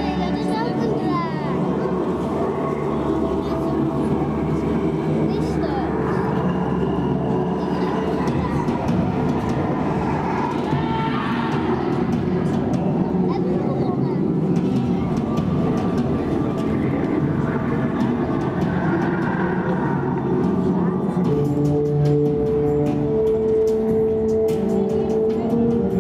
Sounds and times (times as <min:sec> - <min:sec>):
Speech: 0:00.0 - 0:01.8, 0:05.3 - 0:06.3, 0:07.6 - 0:08.9, 0:10.7 - 0:14.3
Music: 0:00.0 - 0:26.0.